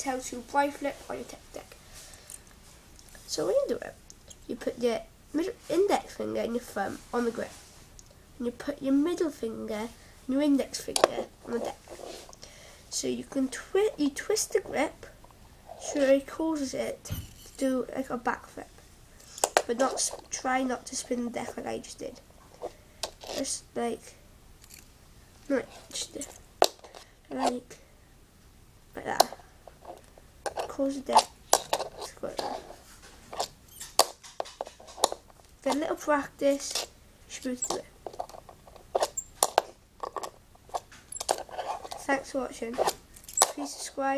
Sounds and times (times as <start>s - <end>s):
Speech: 0.0s - 1.8s, 3.3s - 7.6s, 8.4s - 11.8s, 12.9s - 15.1s, 15.8s - 18.8s, 19.7s - 22.2s, 23.3s - 24.2s, 25.5s - 26.4s, 27.3s - 27.8s, 29.0s - 29.4s, 30.7s - 31.3s, 32.0s - 32.6s, 35.6s - 37.9s, 42.0s - 42.9s, 43.5s - 44.1s.